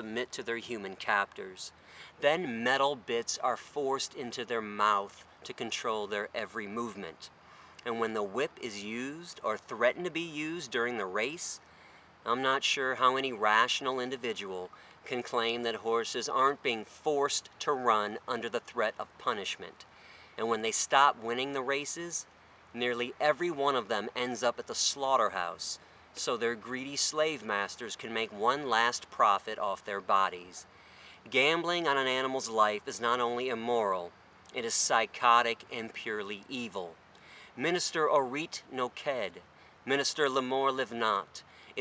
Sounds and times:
Speech: 0.0s - 11.6s, 12.2s - 30.7s, 31.3s - 37.0s, 37.6s - 41.8s.

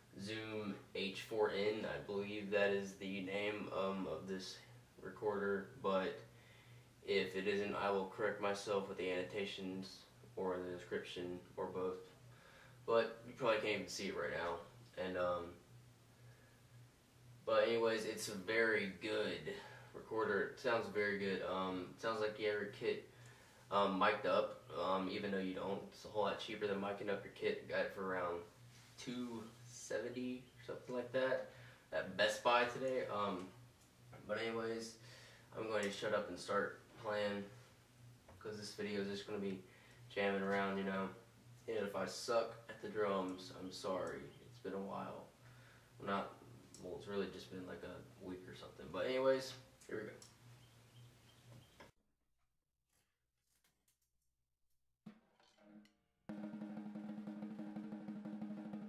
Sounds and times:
Speech: 0.2s - 6.3s, 7.0s - 12.2s, 12.9s - 15.6s, 17.4s - 23.1s, 23.7s - 33.6s, 34.2s - 37.6s, 38.4s - 45.4s, 46.0s - 50.3s.

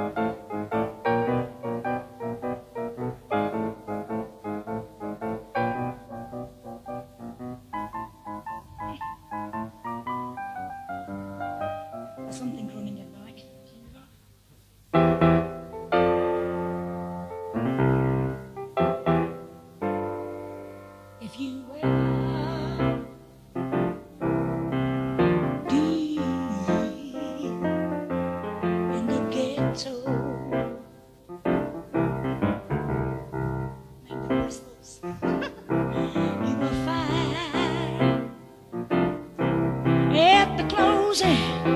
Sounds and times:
Music: 0.0s - 41.7s
Speech: 12.3s - 14.1s.

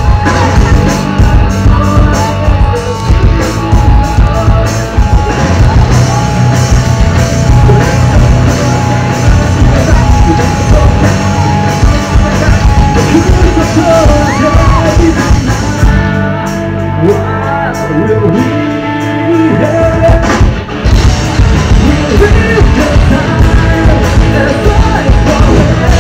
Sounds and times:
Music: 0.0s - 26.0s.

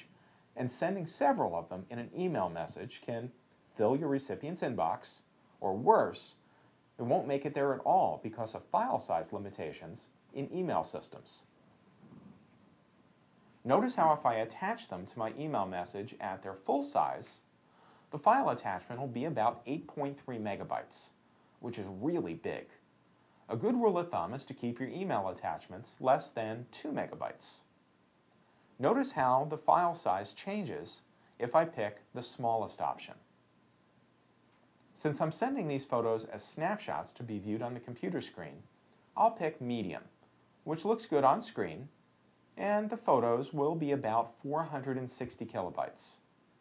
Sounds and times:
Speech: 0.0s - 6.4s, 7.0s - 11.5s, 13.6s - 17.5s, 18.1s - 22.8s, 23.5s - 27.7s, 28.8s - 33.3s, 35.0s - 42.0s, 42.6s - 46.3s.

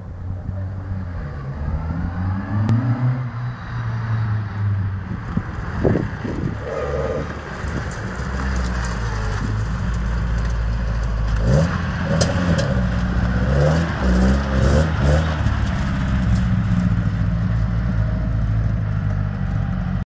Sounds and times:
Car: 0.0s - 20.0s.

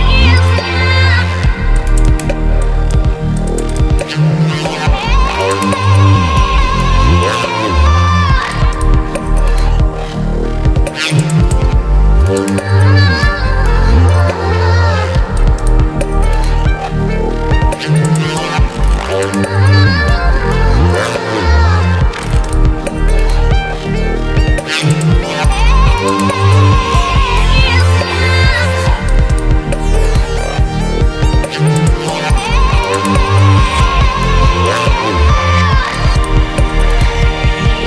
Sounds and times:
Dubstep: 0.0s - 37.8s.

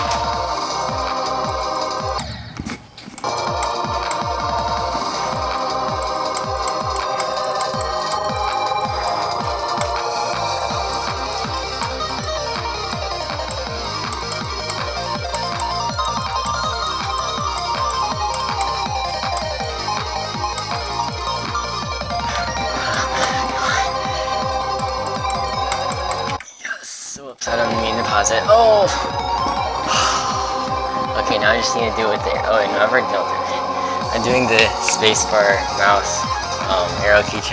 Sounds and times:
Music: 0.0s - 26.4s, 27.4s - 37.5s.

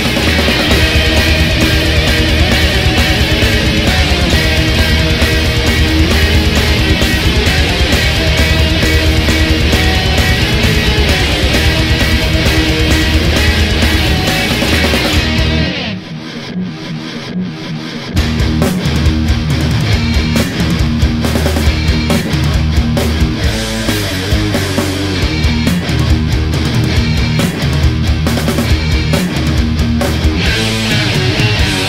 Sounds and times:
Heavy metal: 0.0s - 31.8s.

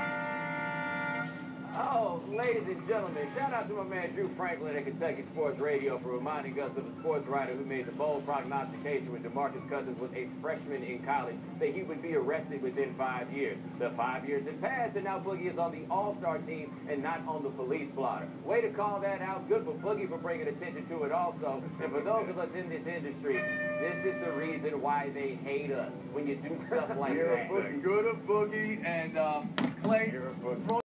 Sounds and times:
Speech: 1.7s - 30.8s.

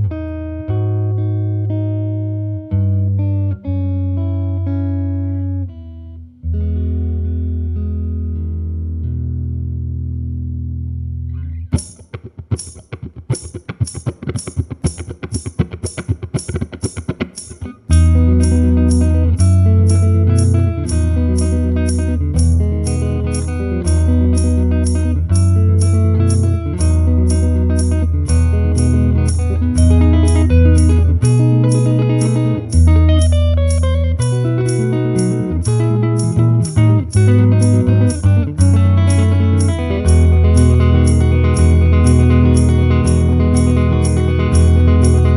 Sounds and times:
Electric guitar: 0.0s - 45.3s
Strum: 0.0s - 45.3s
Acoustic guitar: 11.3s - 45.3s.

